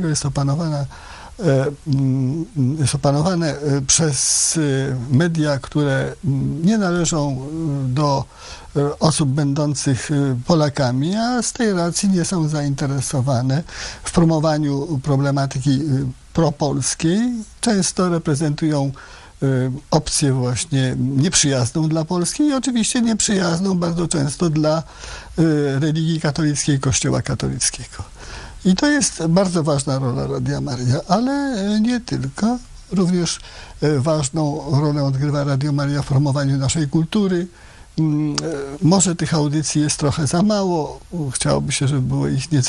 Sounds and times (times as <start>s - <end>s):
Speech: 0.0s - 42.6s.